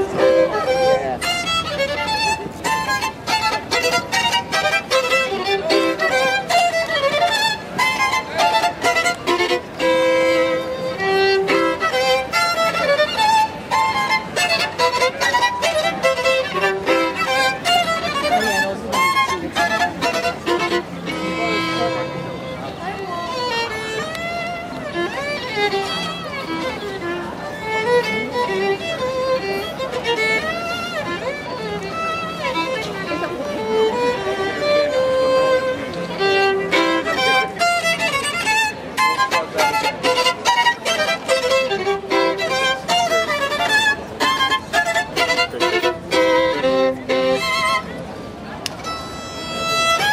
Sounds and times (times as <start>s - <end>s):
Violin, fiddle: 0.0s - 50.1s
Speech: 0.1s - 1.3s, 18.0s - 42.9s, 45.1s - 48.8s.